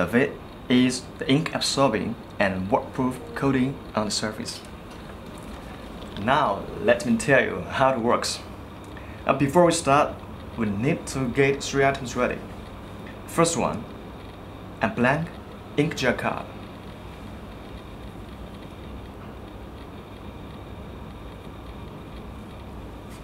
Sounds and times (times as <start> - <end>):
Speech: 0.0 - 4.7, 6.2 - 8.5, 9.3 - 12.5, 13.3 - 13.9, 14.8 - 16.5.